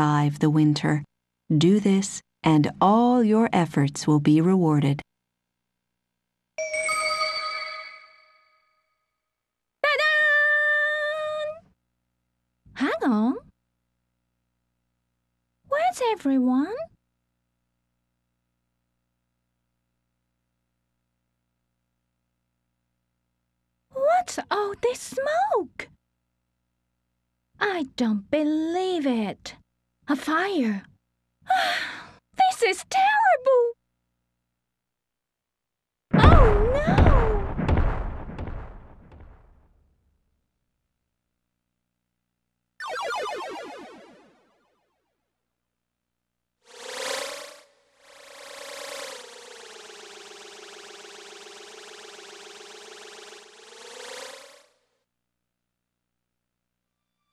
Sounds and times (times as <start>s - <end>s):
Speech: 0.0s - 5.0s, 9.9s - 11.6s, 12.8s - 13.5s, 15.7s - 16.9s, 24.0s - 25.9s, 27.6s - 30.9s, 32.4s - 33.8s, 36.2s - 37.4s.